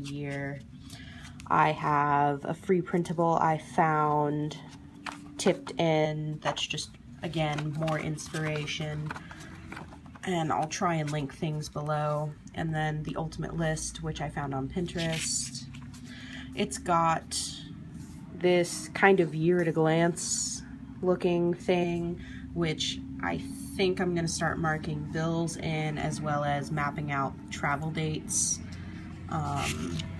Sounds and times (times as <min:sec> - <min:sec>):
Speech: 0:00.0 - 0:00.6, 0:01.5 - 0:04.6, 0:05.4 - 0:09.1, 0:10.2 - 0:15.7, 0:16.6 - 0:17.7, 0:18.4 - 0:28.6, 0:29.3 - 0:30.0.